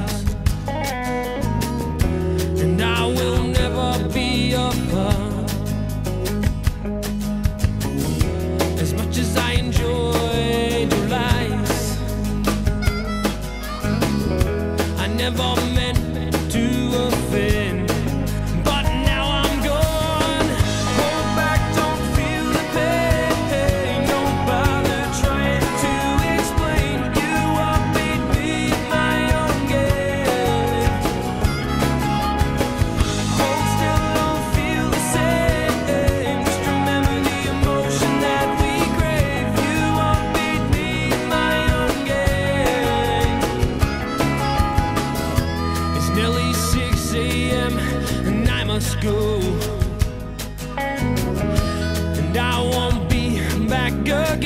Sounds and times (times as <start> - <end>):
Music: 0.0 - 54.4.